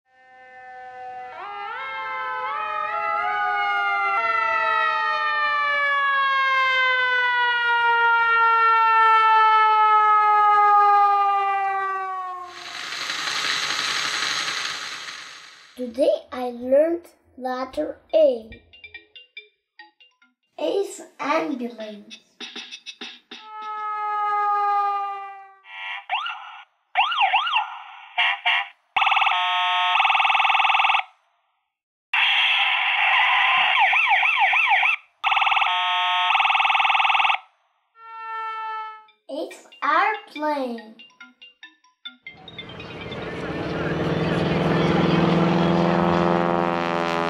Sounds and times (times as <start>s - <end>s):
Outside, urban or manmade: 0.0s - 47.2s
Siren: 0.1s - 15.1s, 23.4s - 31.3s, 32.1s - 39.3s, 42.3s - 47.2s.